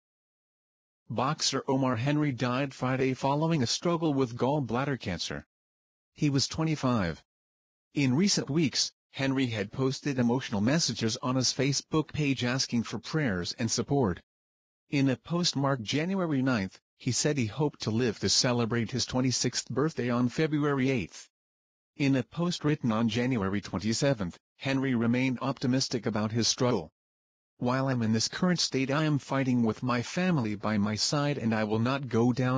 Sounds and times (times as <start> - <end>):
Speech synthesizer: 1.1 - 5.5, 6.2 - 7.2, 8.0 - 14.2, 14.9 - 21.3, 22.0 - 26.9, 27.6 - 32.5.